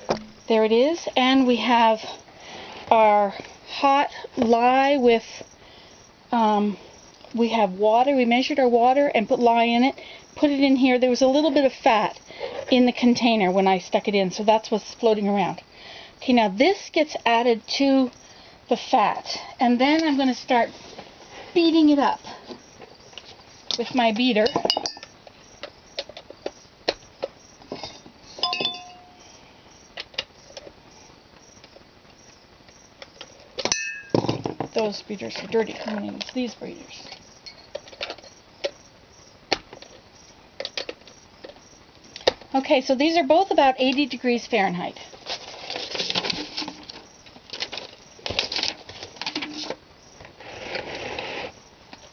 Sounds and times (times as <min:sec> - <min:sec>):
Speech: 0:07.4 - 0:15.6, 0:18.7 - 0:20.7, 0:23.8 - 0:24.6, 0:34.8 - 0:37.1, 0:42.5 - 0:45.1.